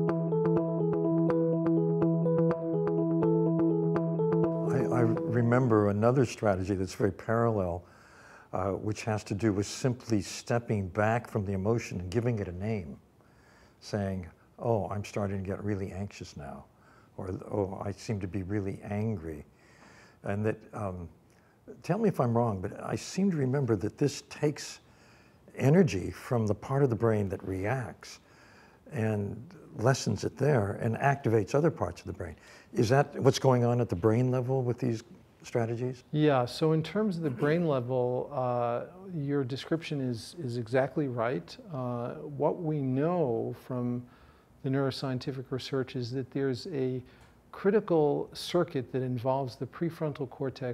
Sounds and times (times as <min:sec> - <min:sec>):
Speech: 0:04.7 - 0:07.9, 0:08.6 - 0:13.0, 0:13.8 - 0:19.5, 0:20.2 - 0:24.8, 0:25.6 - 0:28.2, 0:28.9 - 0:50.7.